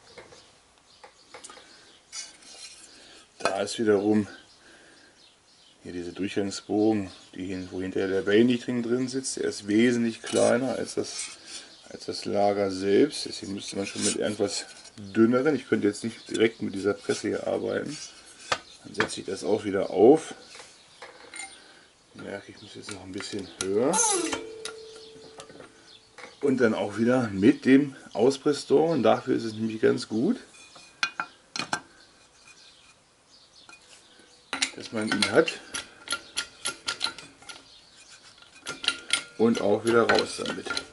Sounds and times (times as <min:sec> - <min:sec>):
Speech: 0:03.4 - 0:04.4, 0:05.8 - 0:11.2, 0:11.9 - 0:18.1, 0:18.8 - 0:20.4, 0:22.2 - 0:24.4, 0:26.4 - 0:30.5, 0:34.7 - 0:35.7, 0:39.4 - 0:40.9.